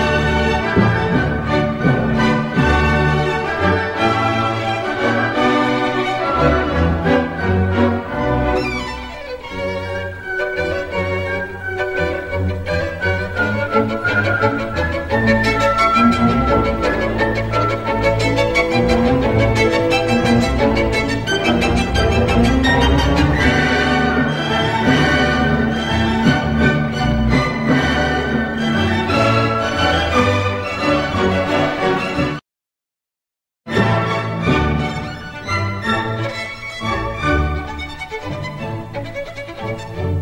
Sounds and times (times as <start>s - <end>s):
Violin, fiddle: 0.0s - 32.4s, 33.7s - 40.2s.